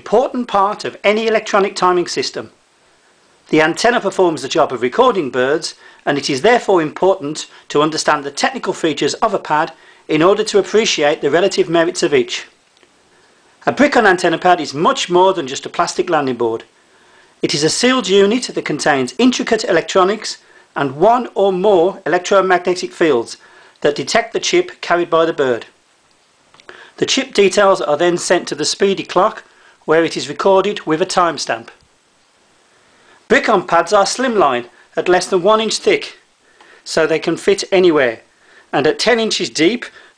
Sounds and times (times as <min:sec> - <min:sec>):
Speech: 0:00.0 - 0:02.6, 0:03.5 - 0:12.6, 0:13.6 - 0:16.7, 0:17.4 - 0:25.8, 0:27.0 - 0:31.8, 0:33.3 - 0:36.3, 0:36.9 - 0:40.0.